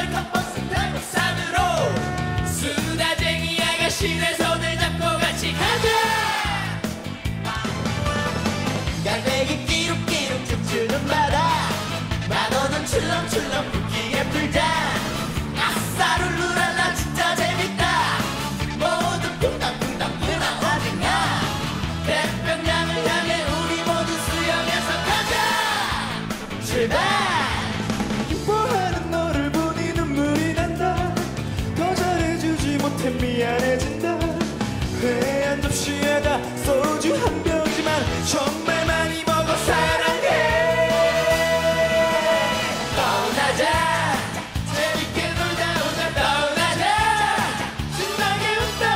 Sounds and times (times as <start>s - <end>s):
Theme music: 0.1s - 48.9s.